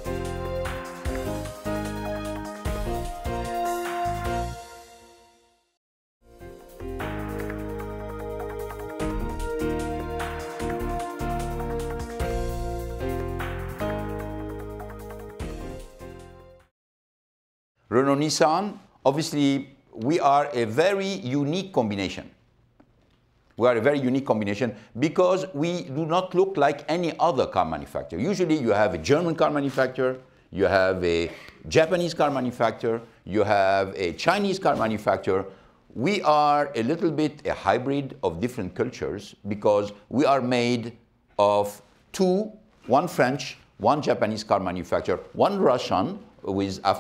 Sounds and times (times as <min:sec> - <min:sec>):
Speech: 0:17.9 - 0:22.4, 0:23.6 - 0:47.0.